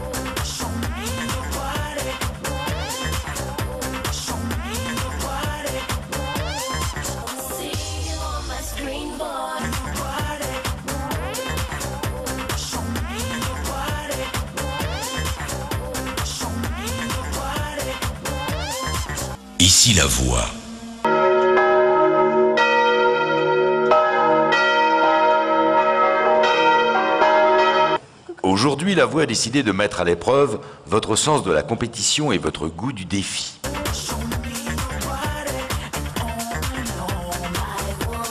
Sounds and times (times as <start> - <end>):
Music: 0.0 - 23.2, 33.6 - 38.3
Speech: 19.6 - 20.6, 28.3 - 33.6.